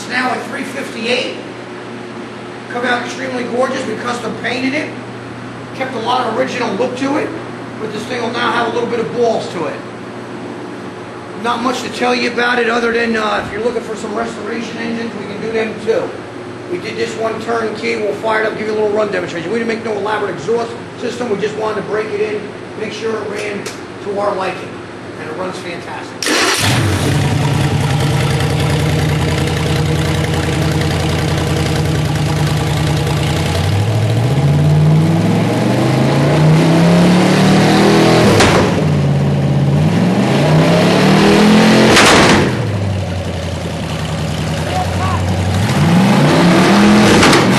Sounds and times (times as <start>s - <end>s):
Speech: 0.0s - 1.4s, 2.7s - 5.0s, 5.8s - 9.9s, 11.4s - 26.2s, 44.6s - 45.3s.